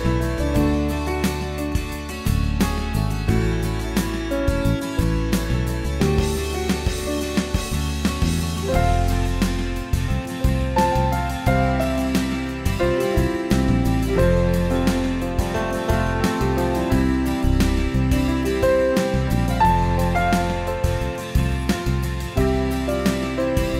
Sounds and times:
Music: 0.0s - 23.7s.

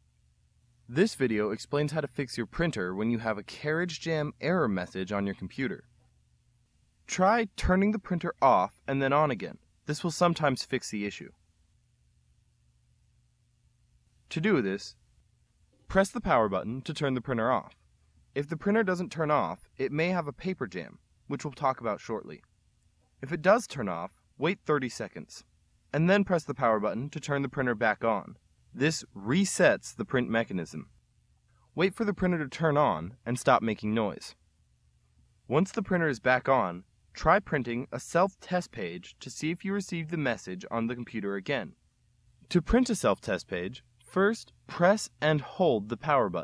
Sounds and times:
Speech: 0.9s - 5.9s, 7.1s - 11.4s, 14.3s - 15.0s, 15.9s - 17.8s, 18.4s - 22.5s, 23.2s - 30.9s, 31.8s - 34.4s, 35.5s - 41.8s, 42.5s - 46.4s.

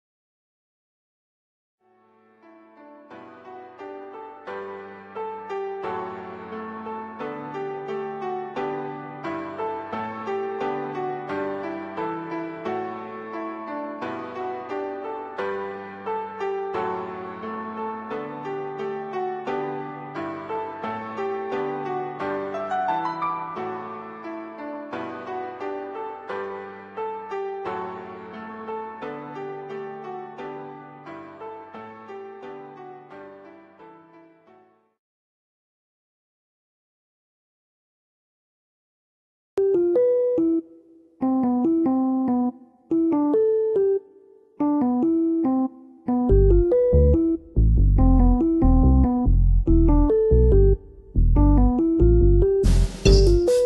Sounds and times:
Music: 1.8s - 35.0s, 39.6s - 53.6s.

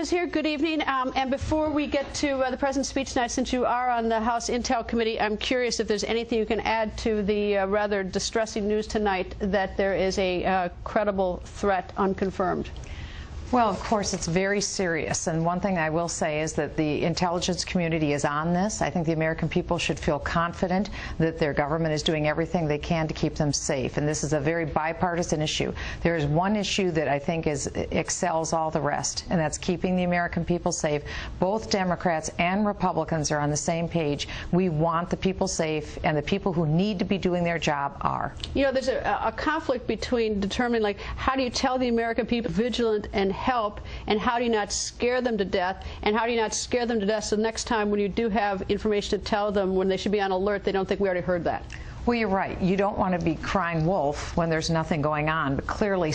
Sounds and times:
Female speech, woman speaking: 0.0s - 12.7s, 13.5s - 56.1s
Narration, monologue: 0.0s - 56.1s.

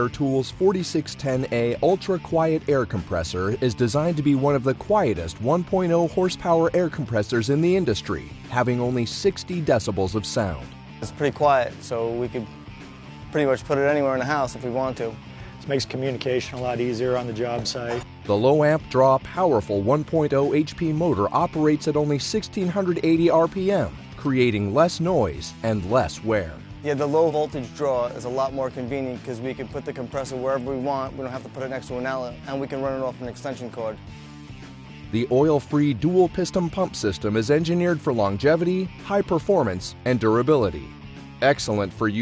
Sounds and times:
Speech: 0.0s - 12.5s, 13.3s - 34.0s, 35.2s - 42.2s
Music: 0.0s - 42.2s.

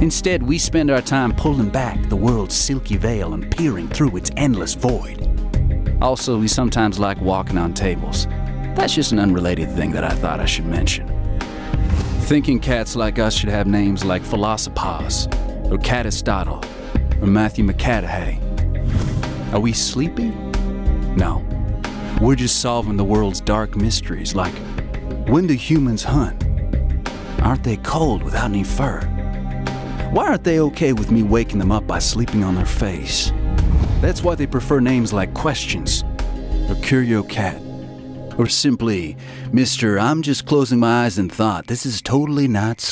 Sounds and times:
Speech: 0.0s - 5.2s, 6.0s - 11.1s, 12.2s - 18.4s, 19.5s - 20.4s, 21.2s - 21.4s, 22.2s - 24.6s, 25.3s - 26.4s, 27.4s - 29.1s, 30.1s - 33.3s, 34.0s - 36.0s, 36.7s - 37.7s, 38.4s - 42.9s
Music: 0.0s - 42.9s.

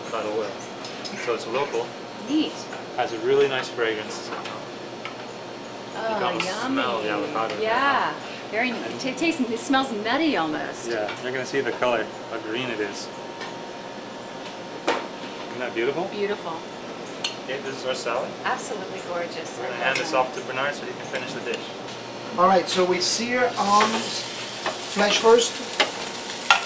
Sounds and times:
Frying (food): 21.3s - 26.6s.

